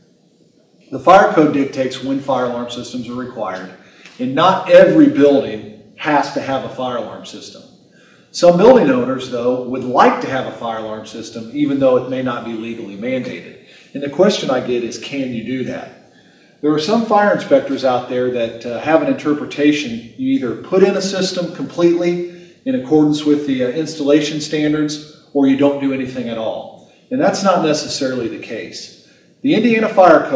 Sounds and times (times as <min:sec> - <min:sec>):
Speech: 0:01.0 - 0:07.7, 0:08.3 - 0:15.9, 0:16.6 - 0:30.3.